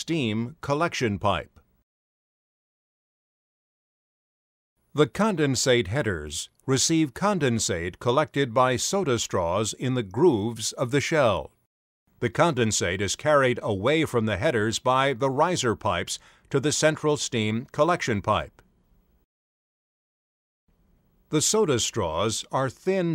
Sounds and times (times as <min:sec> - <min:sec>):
Speech: 0:00.0 - 0:01.6, 0:05.0 - 0:11.6, 0:12.2 - 0:18.6, 0:21.3 - 0:23.1.